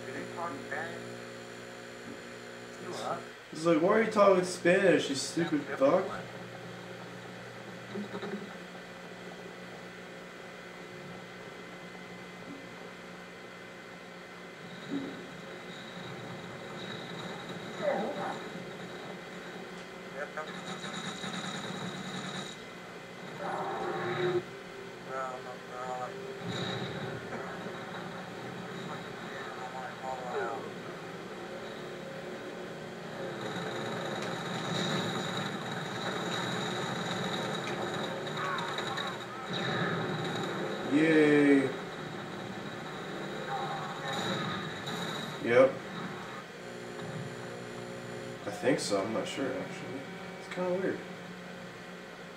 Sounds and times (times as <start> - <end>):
Speech: 0.0 - 1.1, 2.8 - 6.3, 25.1 - 26.2, 40.9 - 41.8, 48.5 - 51.0.